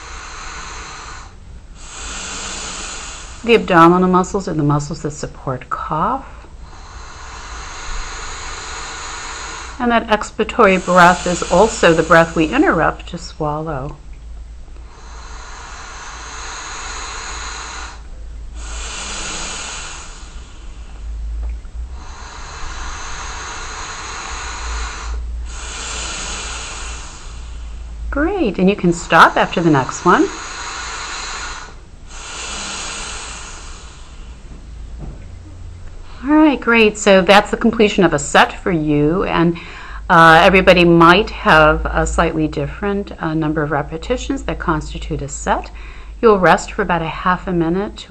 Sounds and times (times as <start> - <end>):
Inside, small room: 0.0 - 48.1
Speech: 3.5 - 6.3, 9.8 - 14.0, 28.2 - 30.4, 36.2 - 48.1.